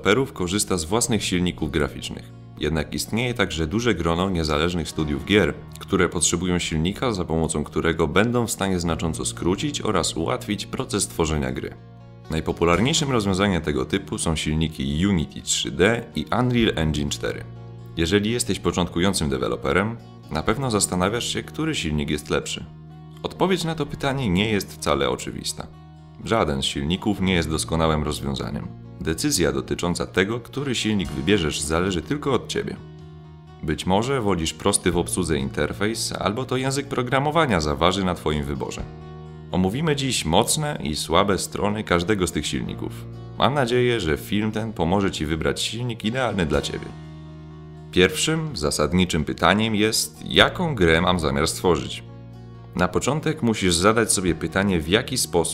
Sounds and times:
Speech: 0.0 - 32.8, 33.6 - 38.9, 39.5 - 47.0, 47.9 - 52.1, 52.8 - 55.5
Music: 0.0 - 55.5.

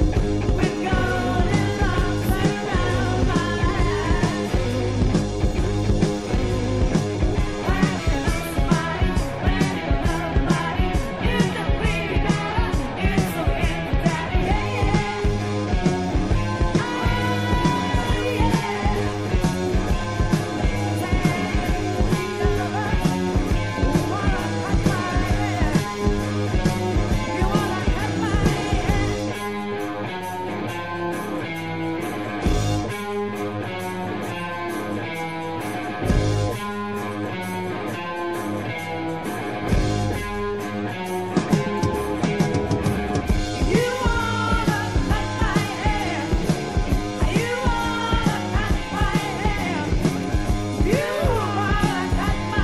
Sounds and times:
Grunge: 0.0 - 52.6.

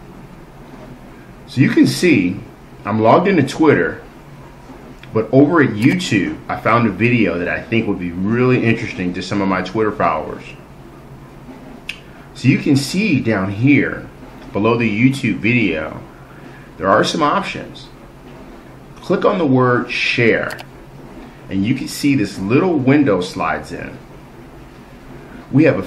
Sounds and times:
Speech: 1.5 - 4.1, 5.0 - 10.6, 12.3 - 16.1, 16.8 - 18.0, 19.0 - 20.6, 21.5 - 24.0, 25.5 - 25.8.

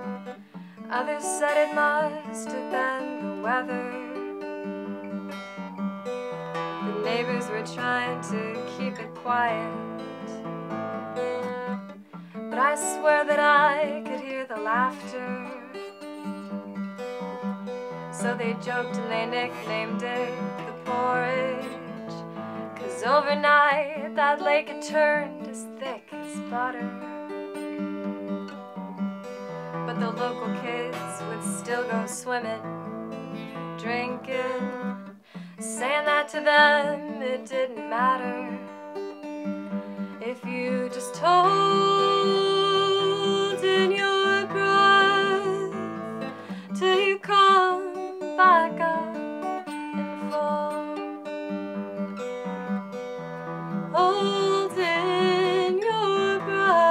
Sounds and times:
Music: 0.0 - 56.9.

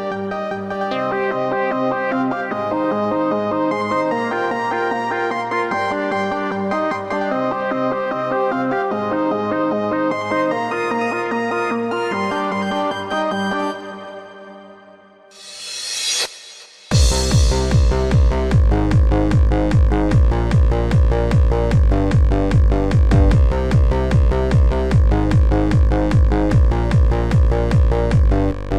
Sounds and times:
Techno: 0.8 - 7.3, 16.8 - 28.7.

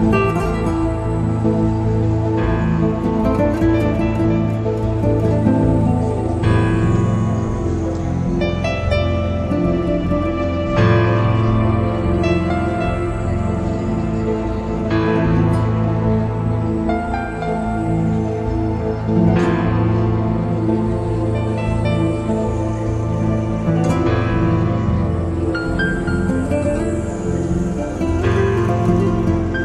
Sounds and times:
Strum: 0.0 - 29.6.

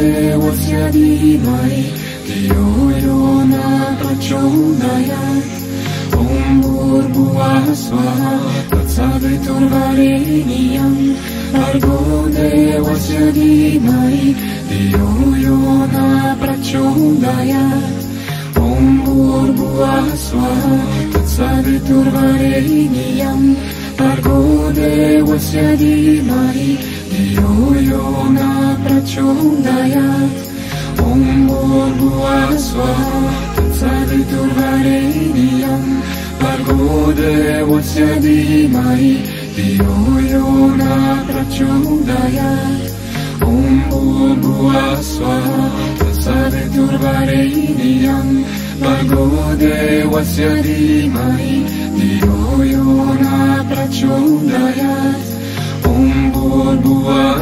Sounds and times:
Mantra: 0.0 - 57.4.

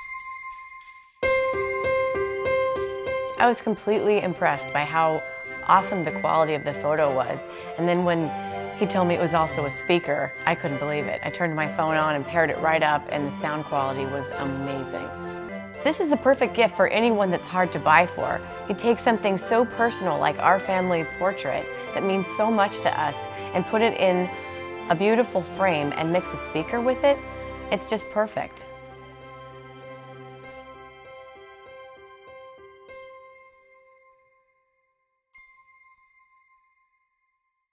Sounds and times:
Music: 0.0 - 37.4
Speech: 3.4 - 15.1, 15.9 - 24.3, 24.9 - 28.6.

